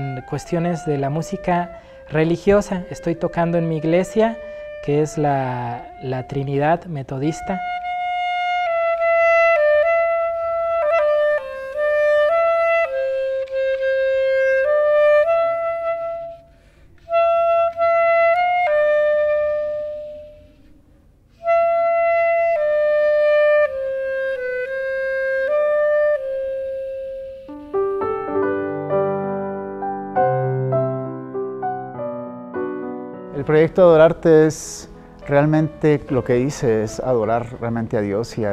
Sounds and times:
Wind instrument, woodwind instrument: 0.0s - 38.5s.

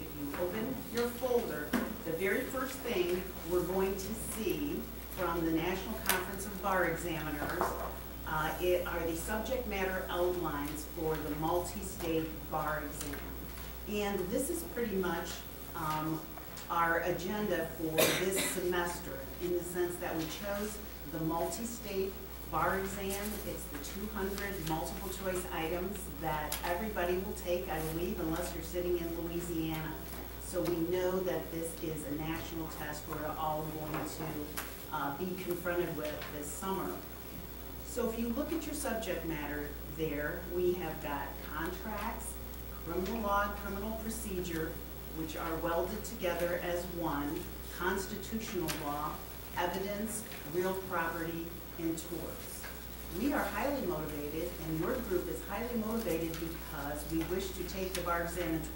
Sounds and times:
Speech: 0.0s - 37.1s, 37.9s - 58.7s.

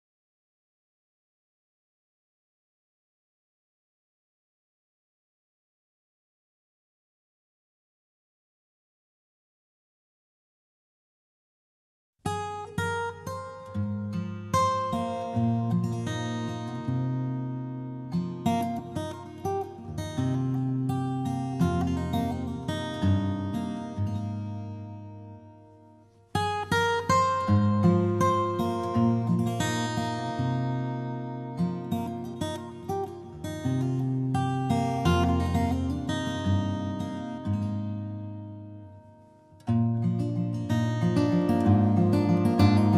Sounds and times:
Acoustic guitar: 12.2s - 42.9s.

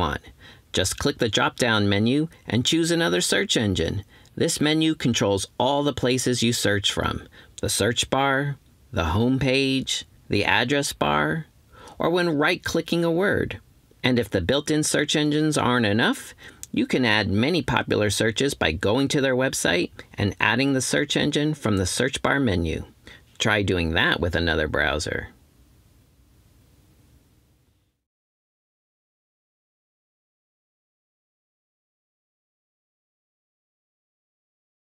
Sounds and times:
Speech: 0.0s - 25.4s.

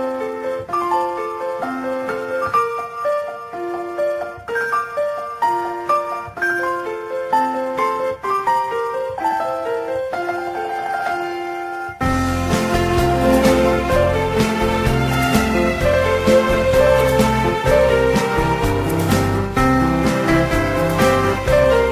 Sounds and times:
Music: 0.0s - 21.9s.

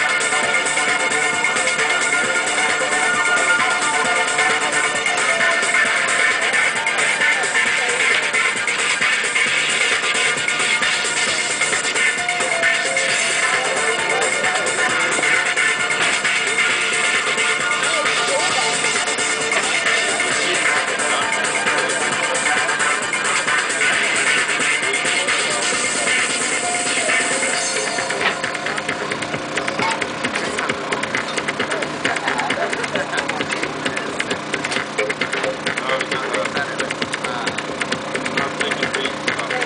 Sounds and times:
Music: 0.0s - 39.6s
Speech: 28.5s - 34.4s, 35.7s - 37.7s, 38.3s - 39.6s.

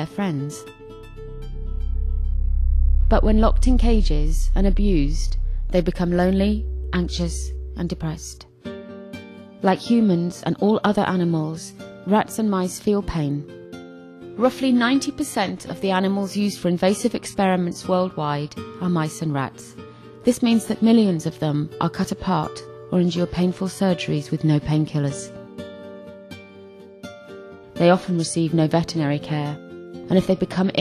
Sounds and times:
Speech: 0.0s - 0.7s, 3.1s - 8.5s, 9.6s - 13.5s, 14.4s - 25.4s, 27.8s - 30.8s
Music: 0.0s - 30.8s.

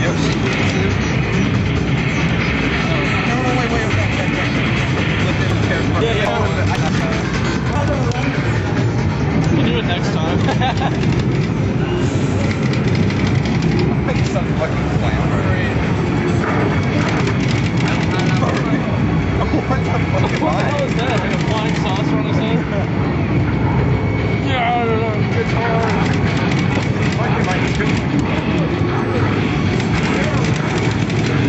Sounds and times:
Speech: 2.8s - 8.5s, 9.5s - 10.4s, 14.0s - 15.9s, 17.0s - 22.9s, 24.4s - 26.2s, 27.0s - 30.8s.

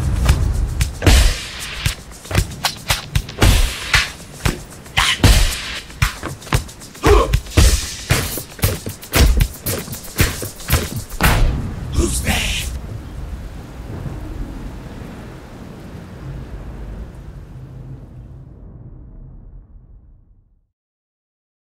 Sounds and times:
Rain on surface: 0.0s - 18.9s.

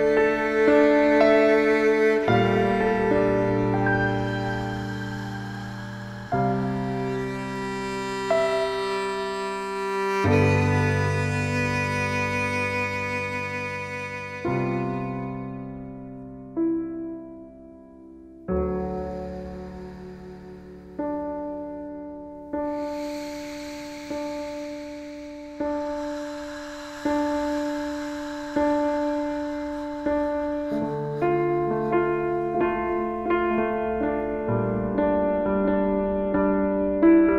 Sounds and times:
Piano: 0.0s - 37.3s.

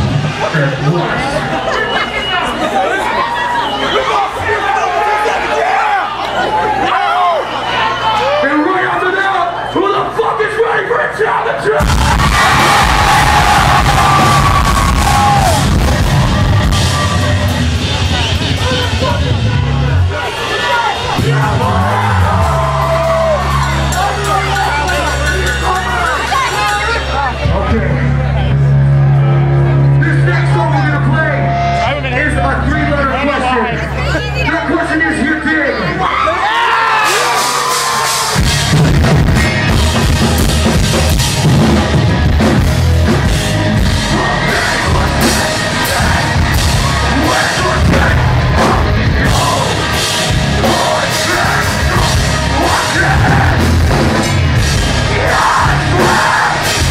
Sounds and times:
Music: 11.8s - 35.2s, 37.0s - 56.9s.

